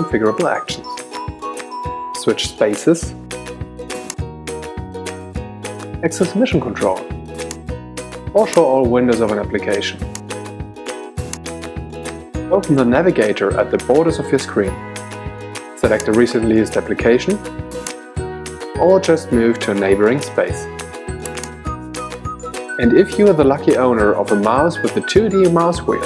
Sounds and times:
Speech: 0.0 - 0.8, 2.2 - 3.2, 6.0 - 7.1, 8.4 - 10.0, 12.5 - 14.8, 15.8 - 17.4, 18.8 - 20.7, 22.8 - 26.0
Music: 0.0 - 26.0.

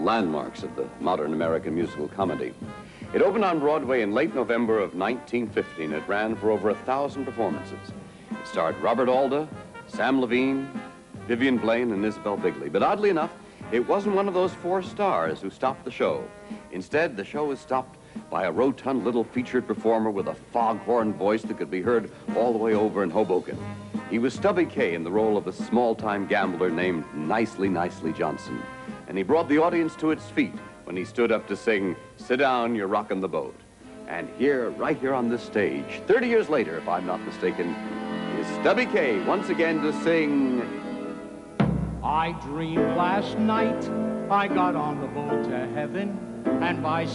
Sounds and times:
Speech: 0.0 - 40.8, 42.0 - 47.1
Music: 0.0 - 47.1.

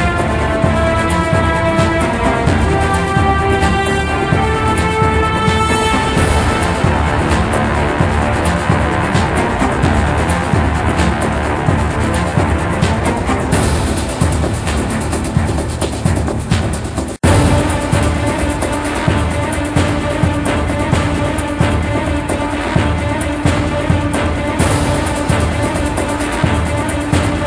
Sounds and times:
Music: 0.0 - 27.4.

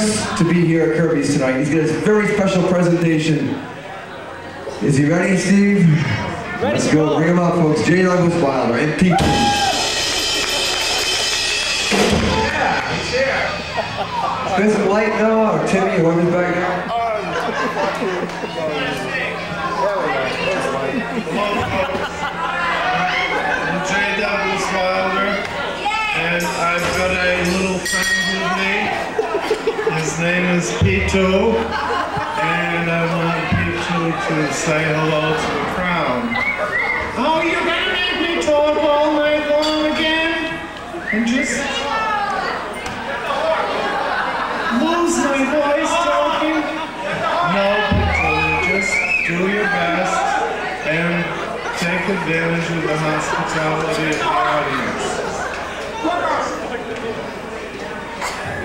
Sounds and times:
Chatter: 0.0 - 58.6
Speech: 32.4 - 44.0, 44.7 - 58.6.

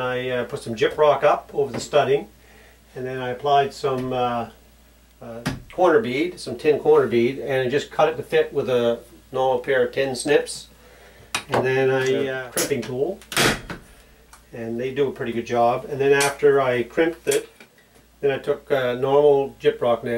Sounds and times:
Speech: 0.0 - 2.3, 3.0 - 4.6, 5.2 - 10.7, 11.5 - 13.2, 14.5 - 17.5, 18.2 - 20.1.

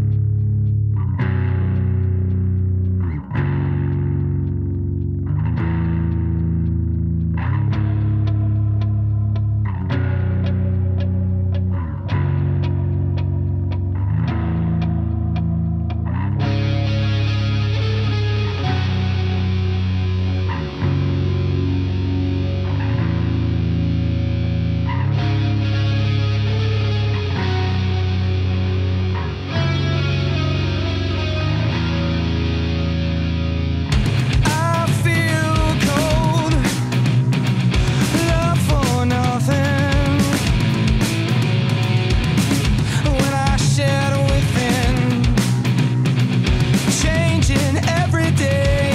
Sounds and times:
Rhythm and blues: 0.0 - 48.9.

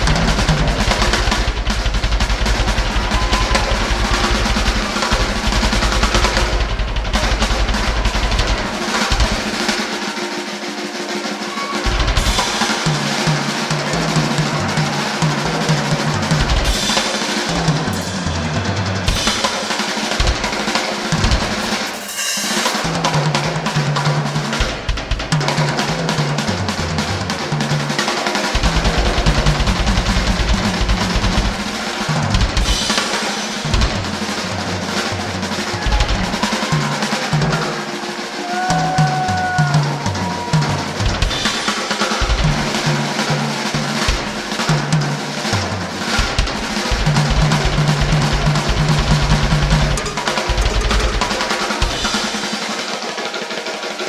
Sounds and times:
Bass drum: 0.0 - 9.5, 28.6 - 32.9, 45.6 - 52.2
Drum kit: 0.0 - 54.0.

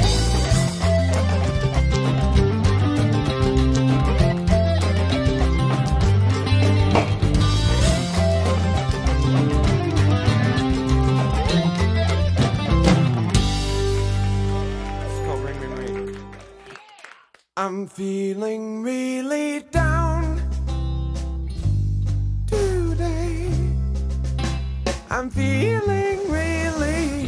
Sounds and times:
Music: 0.0 - 16.8, 19.1 - 27.2.

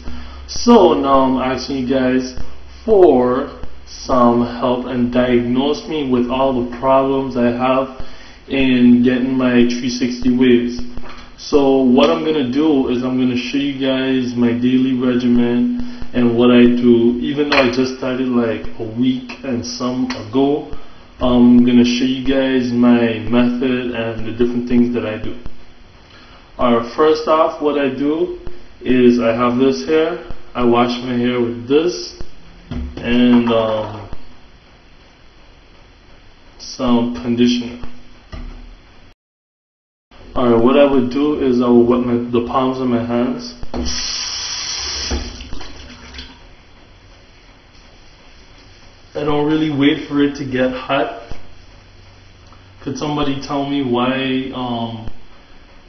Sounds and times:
Speech: 0.5 - 25.5, 26.6 - 32.2, 33.0 - 34.2, 36.6 - 37.9, 40.3 - 43.7, 49.2 - 51.4, 52.8 - 55.2.

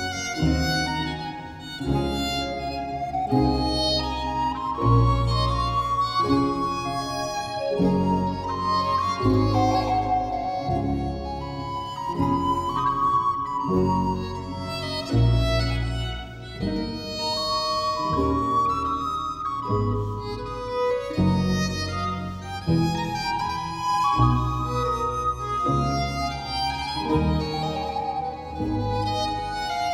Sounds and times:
Music: 0.0 - 29.9.

